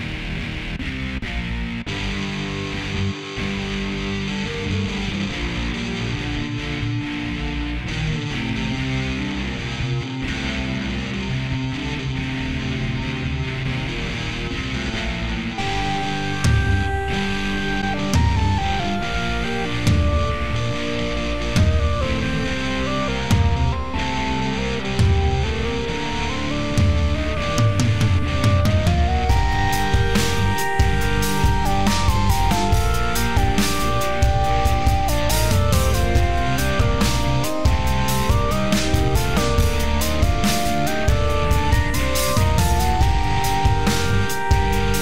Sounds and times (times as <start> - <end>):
Music: 0.0 - 45.0.